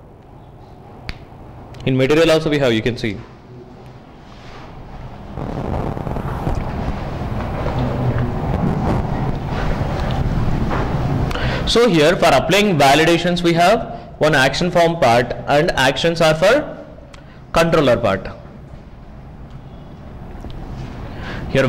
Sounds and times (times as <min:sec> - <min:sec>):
Speech: 0:01.8 - 0:03.3, 0:11.7 - 0:16.8, 0:17.5 - 0:18.4.